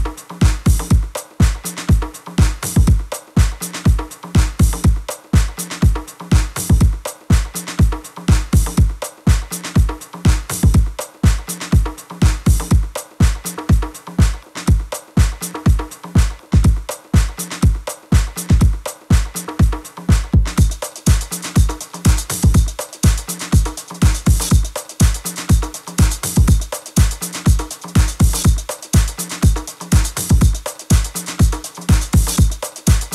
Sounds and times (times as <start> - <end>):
Music: 0.0 - 33.1.